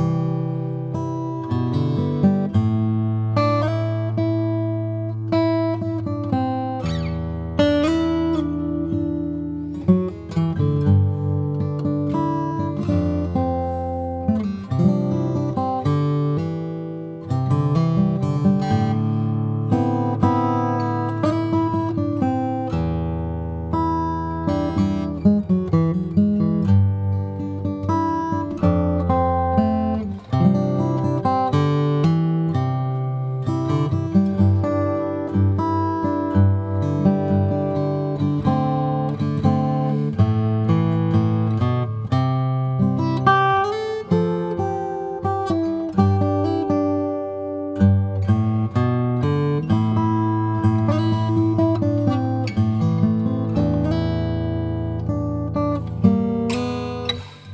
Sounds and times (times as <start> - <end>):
Guitar: 0.0 - 57.5.